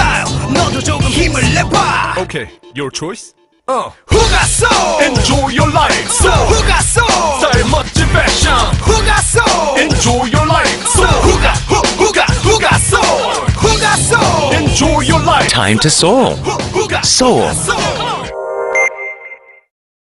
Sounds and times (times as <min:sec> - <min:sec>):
Music: 0:00.0 - 0:19.7
Speech: 0:02.8 - 0:04.0, 0:15.4 - 0:16.4, 0:17.0 - 0:17.7.